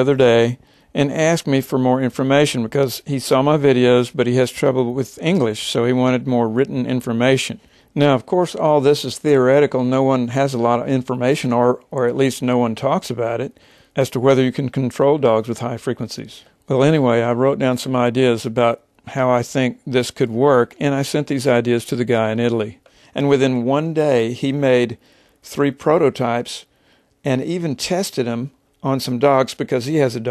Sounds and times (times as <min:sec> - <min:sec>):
Speech: 0:00.0 - 0:30.3.